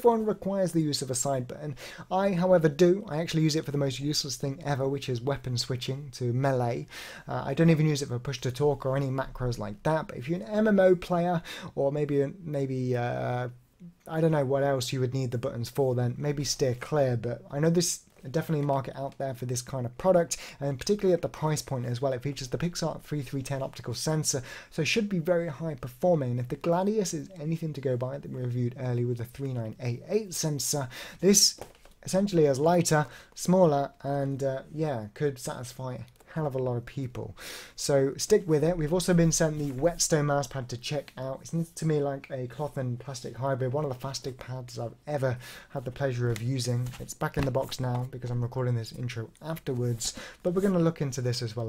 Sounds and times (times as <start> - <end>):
Speech: 0.0 - 51.6.